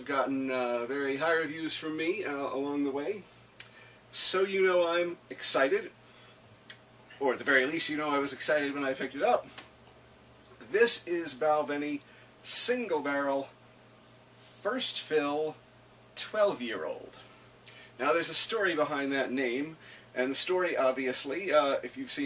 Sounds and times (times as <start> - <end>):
Speech: 0.0 - 3.3, 4.1 - 6.0, 7.2 - 9.6, 10.6 - 13.6, 14.5 - 15.6, 16.2 - 17.3, 18.0 - 22.2.